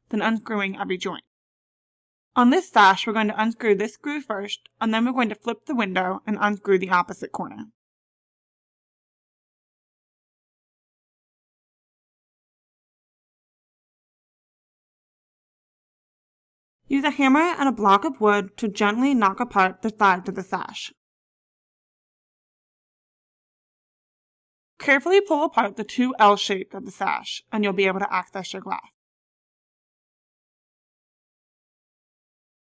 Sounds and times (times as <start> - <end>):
Speech: 0.0 - 1.3, 2.4 - 7.8, 16.9 - 21.0, 24.8 - 29.0.